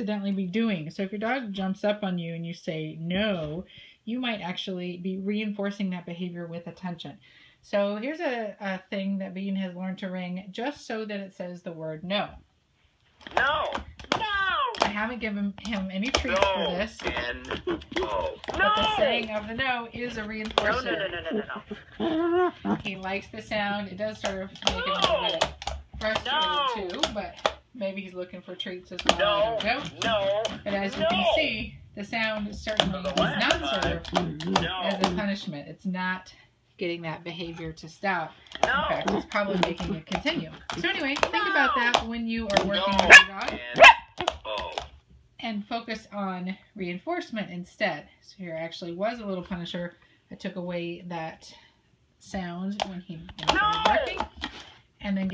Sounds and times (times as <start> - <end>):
Speech: 0.0 - 12.4, 13.4 - 21.4, 22.7 - 43.8, 44.5 - 44.8, 52.2 - 54.3, 55.0 - 55.3.